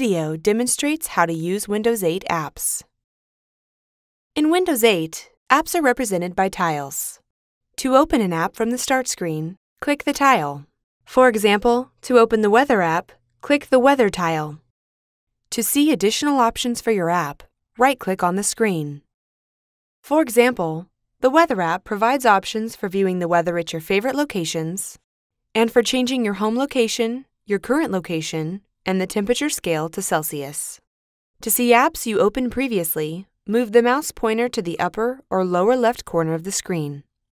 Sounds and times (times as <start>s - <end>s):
Speech: 0.0s - 2.9s, 4.4s - 7.2s, 7.8s - 14.6s, 15.5s - 19.0s, 20.0s - 25.0s, 25.6s - 30.8s, 31.4s - 37.0s.